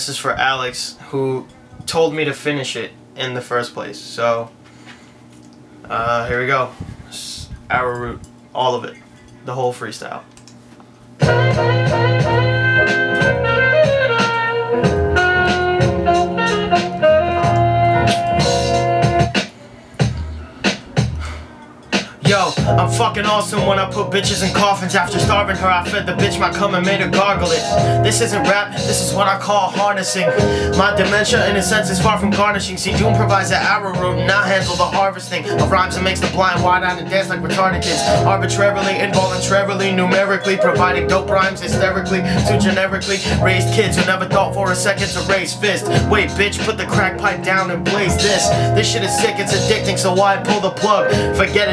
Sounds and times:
Music: 0:11.1 - 0:51.7.

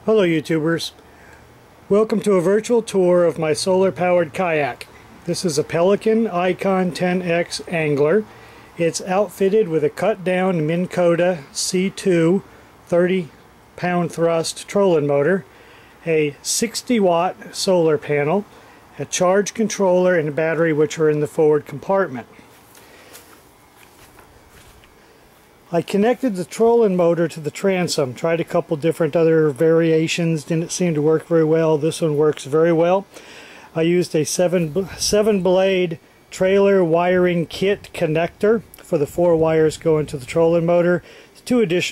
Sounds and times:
Speech: 0:00.0 - 0:01.0, 0:01.9 - 0:22.3, 0:25.7 - 0:33.1, 0:33.7 - 0:41.9.

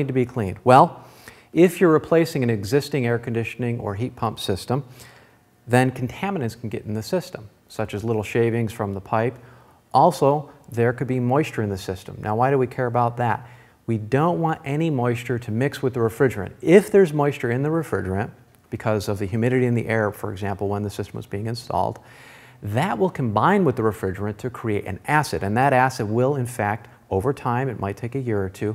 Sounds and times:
Speech: 0:00.0 - 0:04.9, 0:05.7 - 0:22.0, 0:22.6 - 0:28.7.

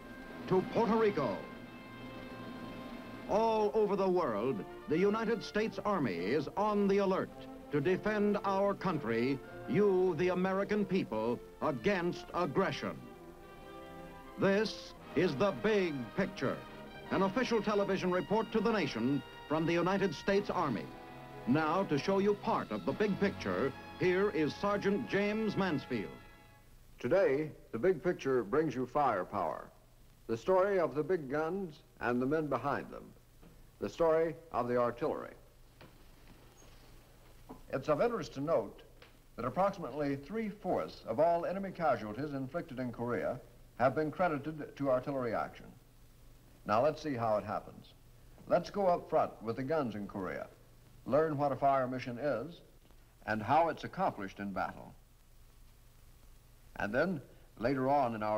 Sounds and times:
Music: 0:00.0 - 0:26.8
Speech: 0:00.5 - 0:01.4, 0:03.3 - 0:13.0, 0:14.4 - 0:20.9, 0:21.5 - 0:26.2, 0:27.0 - 0:33.2, 0:33.8 - 0:35.5, 0:37.7 - 0:45.8, 0:46.6 - 0:55.0, 0:56.8 - 0:58.3.

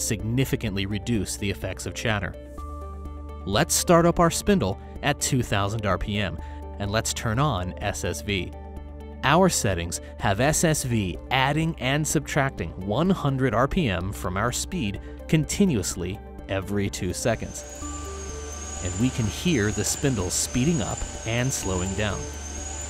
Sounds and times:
Speech: 0:00.0 - 0:02.4, 0:03.4 - 0:08.5, 0:09.2 - 0:17.6, 0:18.8 - 0:22.3
Music: 0:00.0 - 0:22.8.

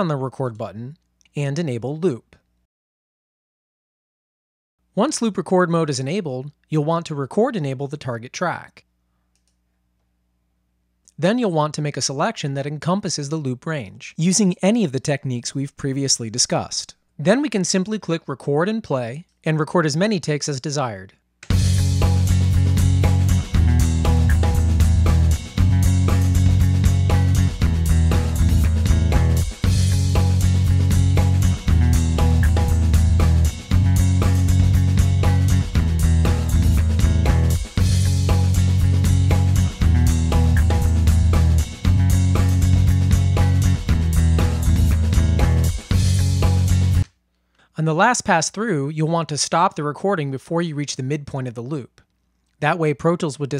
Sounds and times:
Speech: 0:00.0 - 0:02.4, 0:05.0 - 0:08.9, 0:11.1 - 0:21.2, 0:47.8 - 0:52.0, 0:52.6 - 0:53.5.

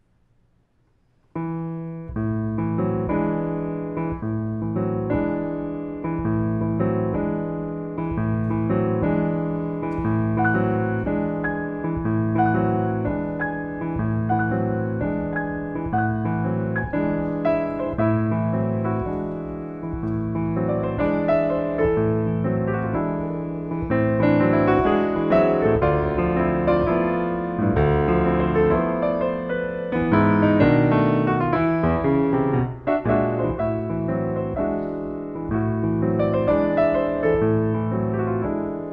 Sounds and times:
Piano: 0:00.0 - 0:38.9
Classical music: 0:01.2 - 0:38.9.

